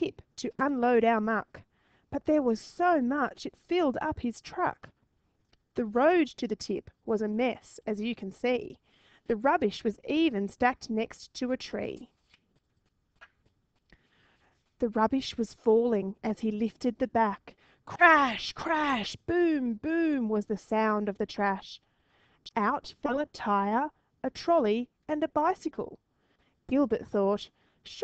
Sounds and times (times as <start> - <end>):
Speech: 0.0 - 1.6, 2.2 - 4.9, 5.8 - 12.1, 14.8 - 21.8, 22.5 - 26.0, 26.7 - 28.0.